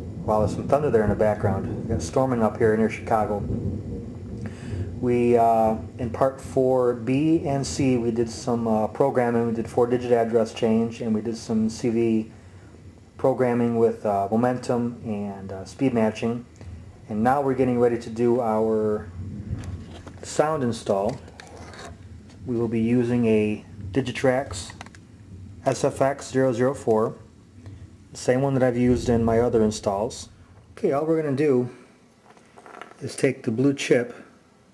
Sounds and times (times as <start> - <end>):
Speech: 0.2 - 3.6, 5.0 - 12.3, 13.2 - 16.5, 17.1 - 19.1, 20.2 - 21.2, 22.4 - 24.8, 25.6 - 27.3, 28.2 - 31.8, 33.0 - 34.3.